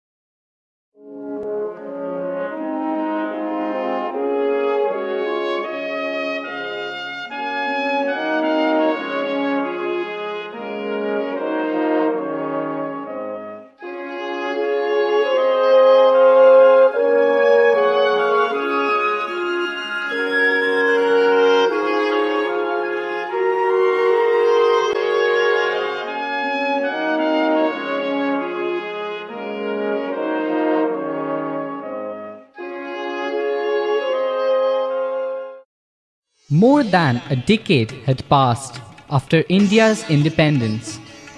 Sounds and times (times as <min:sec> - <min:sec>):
Trombone: 0:01.0 - 0:32.4.